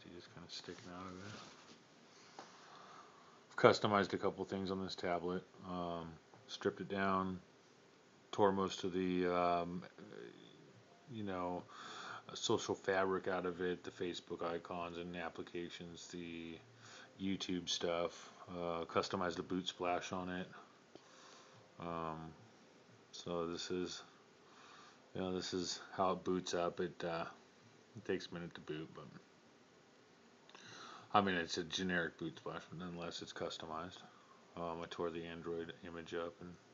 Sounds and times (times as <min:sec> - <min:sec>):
Speech: 0:00.0 - 0:01.6, 0:03.5 - 0:07.5, 0:08.3 - 0:11.7, 0:12.3 - 0:16.6, 0:17.2 - 0:20.7, 0:21.8 - 0:22.4, 0:23.1 - 0:24.2, 0:25.1 - 0:27.4, 0:28.0 - 0:29.3, 0:31.1 - 0:36.6.